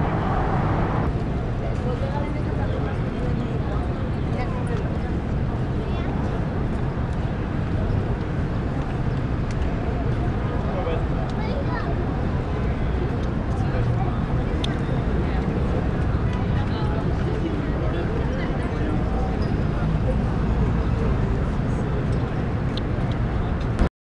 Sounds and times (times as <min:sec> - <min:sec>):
Speech: 0:01.4 - 0:23.9.